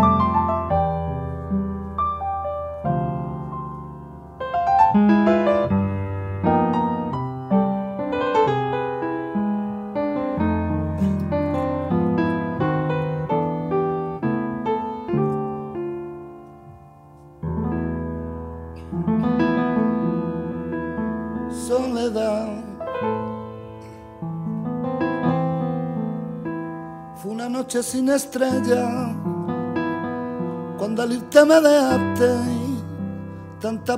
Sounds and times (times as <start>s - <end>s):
Music: 0.0s - 33.9s.